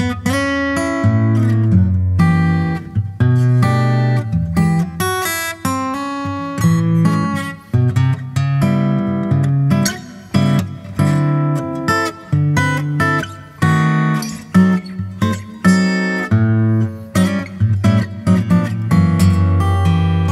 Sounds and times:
Acoustic guitar: 0.0 - 20.3.

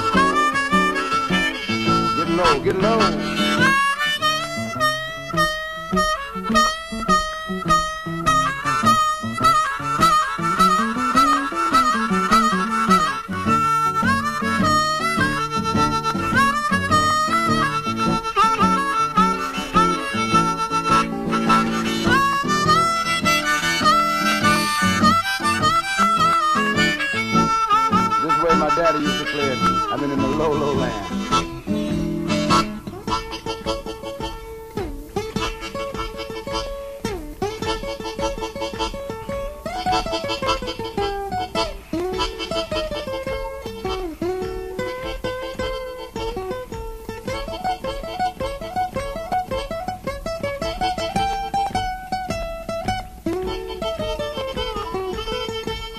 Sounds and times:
Blues: 0.0 - 55.9
Ukulele: 0.0 - 55.9.

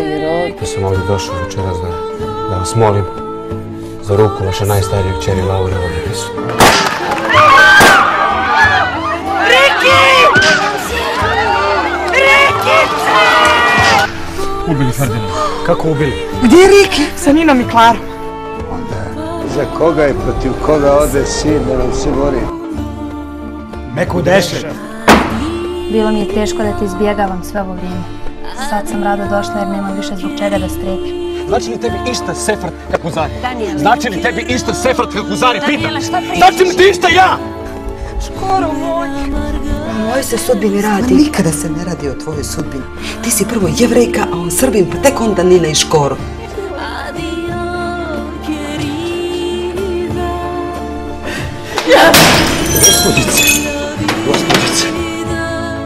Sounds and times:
Music: 0.0 - 55.8.

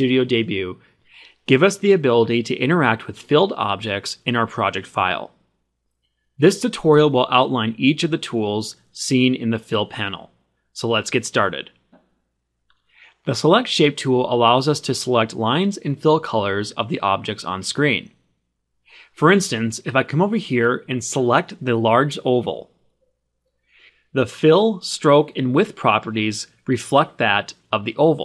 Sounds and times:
Speech: 0.0 - 5.4, 6.4 - 11.8, 13.1 - 18.2, 19.0 - 22.8, 24.1 - 28.2.

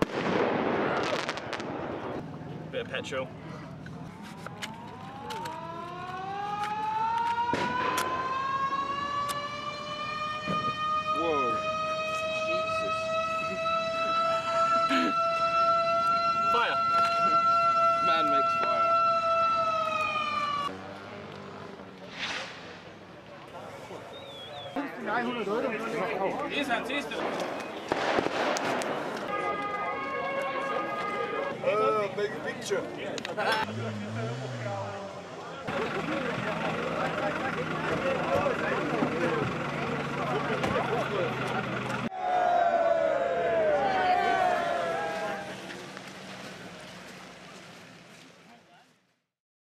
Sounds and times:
Outside, urban or manmade: 0.0 - 49.4
Car: 20.0 - 24.2, 31.0 - 42.1, 43.0 - 49.2
Speech: 29.4 - 42.1.

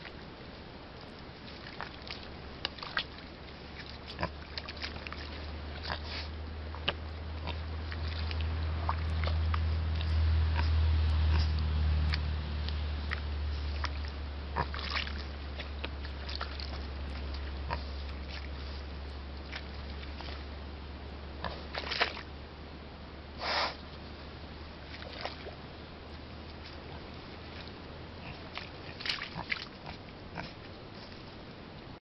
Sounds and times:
Oink: 3.8 - 12.2, 13.0 - 18.8, 21.4 - 22.2, 26.6 - 31.1.

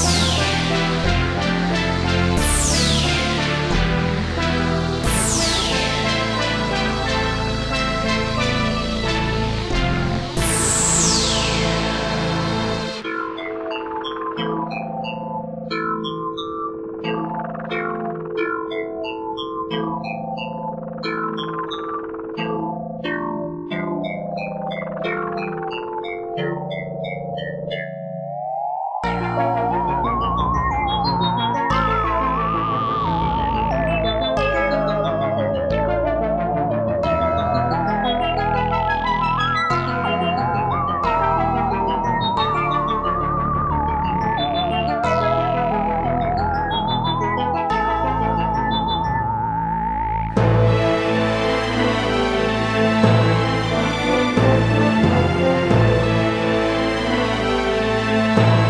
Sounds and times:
Electronic dance music: 0.0 - 14.7, 29.0 - 58.6.

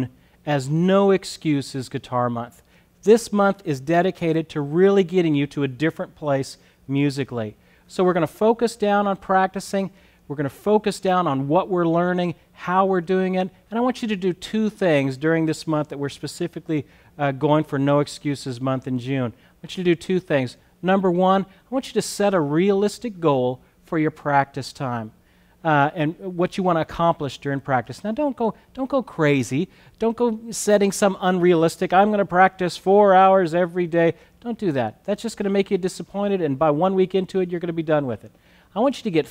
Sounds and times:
Speech: 0.0 - 39.3.

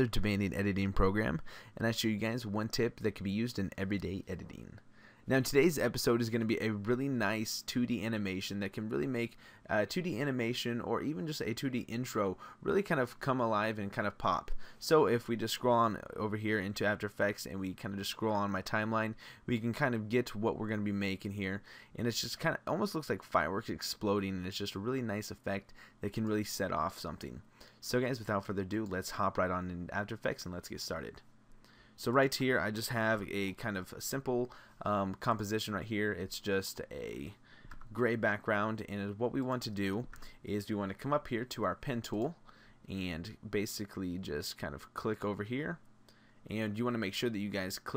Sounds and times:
Speech: 0.0 - 31.2, 32.0 - 45.8, 46.5 - 47.9.

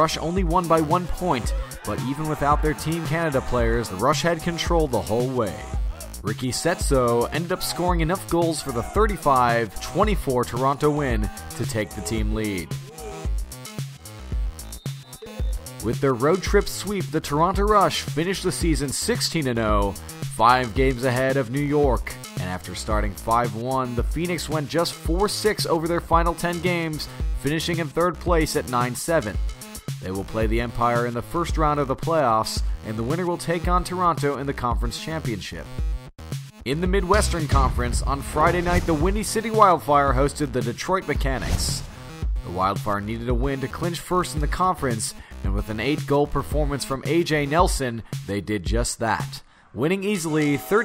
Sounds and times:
Speech: 0.0 - 12.8, 15.8 - 29.4, 30.0 - 35.7, 36.7 - 50.8
Music: 0.0 - 50.8.

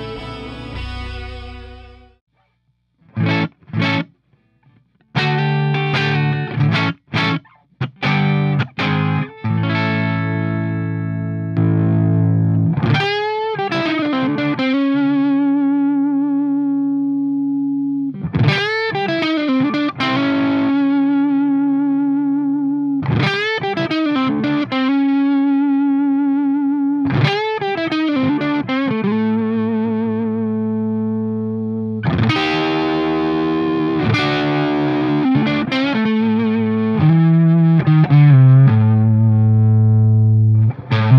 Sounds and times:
Distortion: 0.0 - 41.1
Effects unit: 0.0 - 41.1
Guitar: 0.0 - 41.1.

